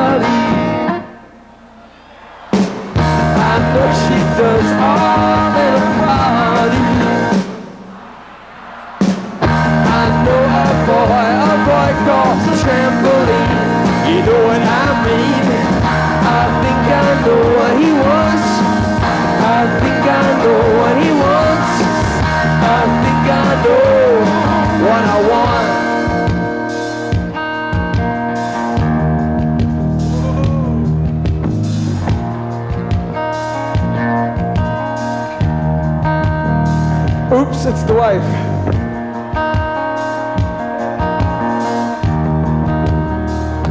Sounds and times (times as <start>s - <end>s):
Rock and roll: 0.0s - 43.7s
Singing: 1.8s - 9.2s, 9.8s - 25.9s.